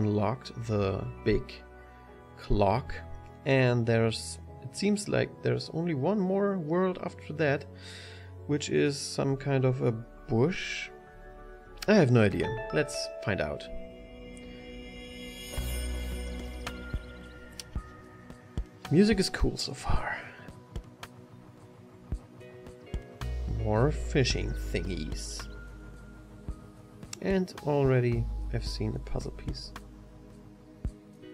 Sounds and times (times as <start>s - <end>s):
Speech: 0.0s - 1.6s, 2.4s - 7.6s, 8.5s - 10.9s, 11.8s - 13.7s, 18.9s - 20.4s, 23.5s - 25.5s, 27.2s - 29.8s
Music: 0.0s - 31.3s.